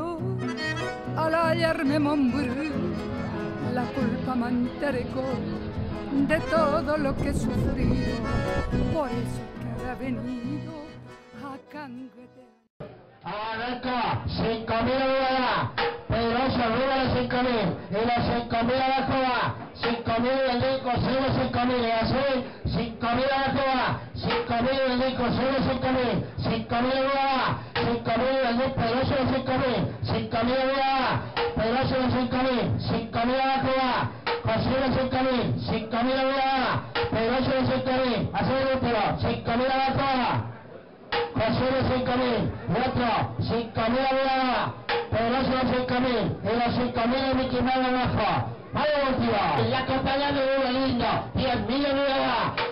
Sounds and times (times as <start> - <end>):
Music: 0.0 - 12.7, 34.1 - 35.6.